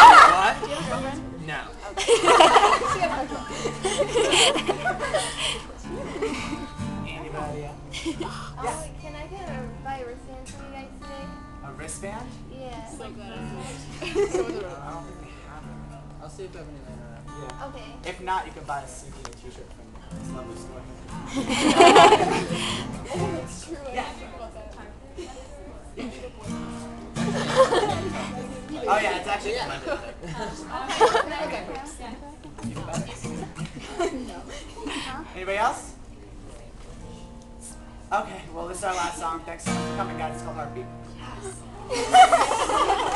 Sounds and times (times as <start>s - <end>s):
Music: 0.0s - 24.6s, 26.4s - 29.2s, 32.5s - 33.8s, 36.9s - 43.1s.